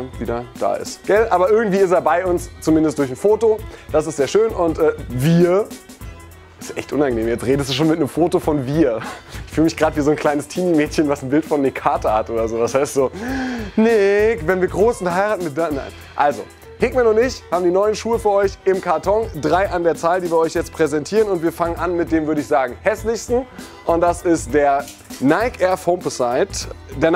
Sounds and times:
Speech: 0.0 - 5.8, 6.6 - 27.1
Music: 0.0 - 27.1.

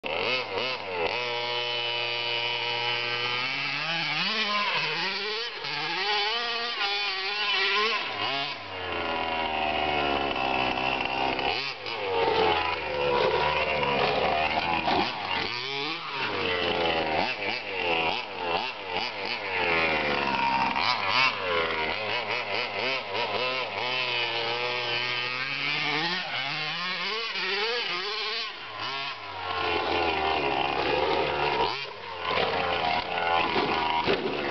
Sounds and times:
Outside, rural or natural: 0.0 - 34.5.

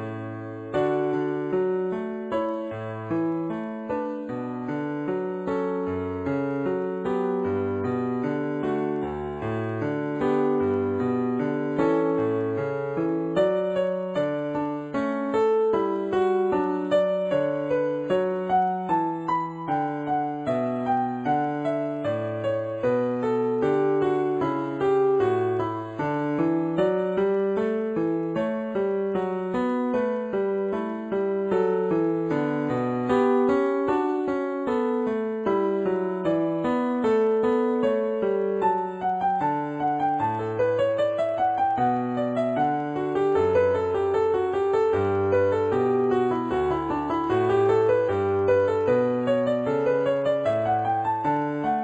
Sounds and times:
Music: 0.0 - 51.8.

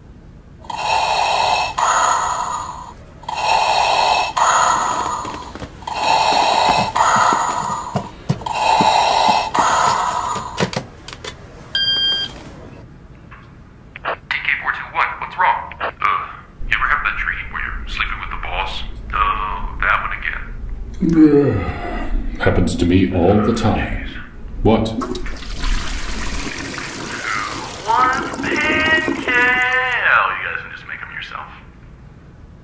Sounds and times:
Speech: 14.2 - 25.0, 27.1 - 31.7.

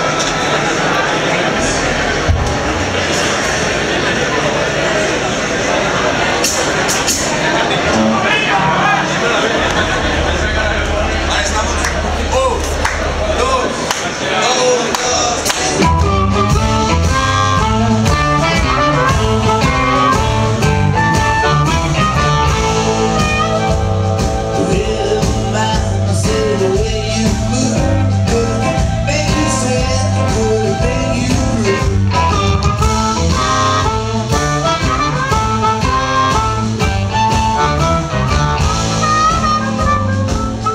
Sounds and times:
Blues: 0.0 - 40.7.

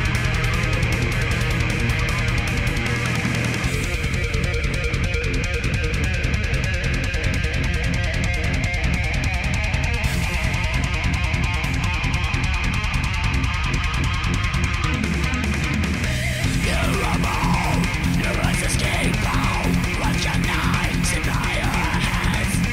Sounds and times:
Electric guitar: 0.0 - 22.7.

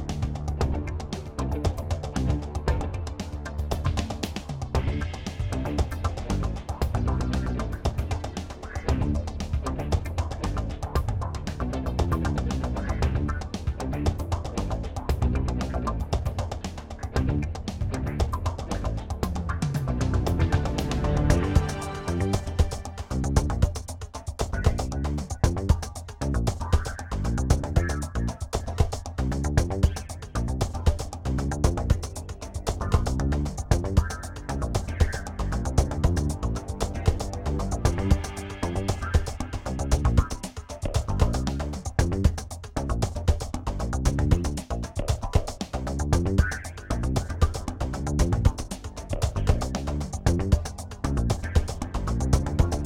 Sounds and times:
Music: 0.0 - 52.8.

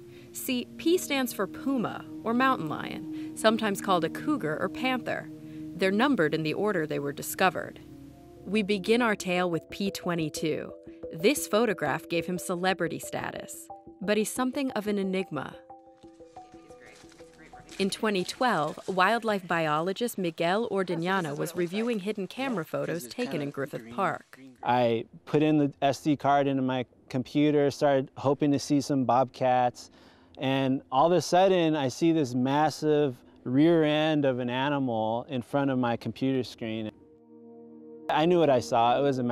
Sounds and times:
Speech: 0.4 - 5.2, 5.8 - 7.8, 8.5 - 15.6, 16.8 - 36.9, 38.1 - 39.3.

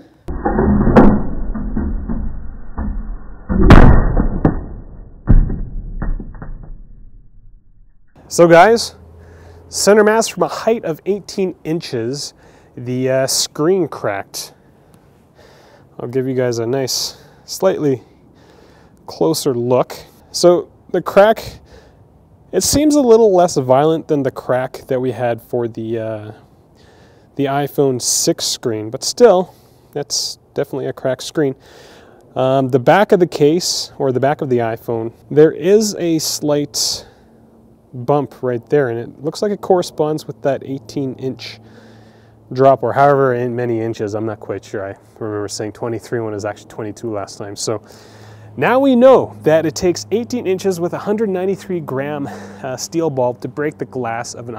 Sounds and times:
Speech: 8.3 - 9.0, 9.7 - 14.6, 16.0 - 18.1, 19.1 - 21.6, 22.5 - 26.4, 27.4 - 31.6, 32.4 - 37.1, 38.0 - 41.6, 42.5 - 47.9, 48.6 - 54.5.

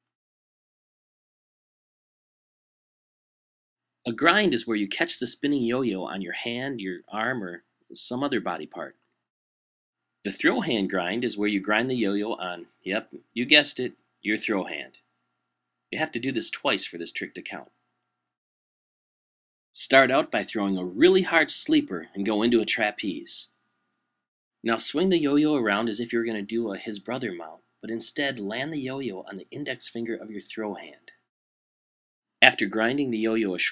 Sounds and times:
Speech: 4.0 - 9.0, 10.2 - 15.1, 15.9 - 17.8, 19.8 - 23.6, 24.6 - 31.3, 32.4 - 33.7.

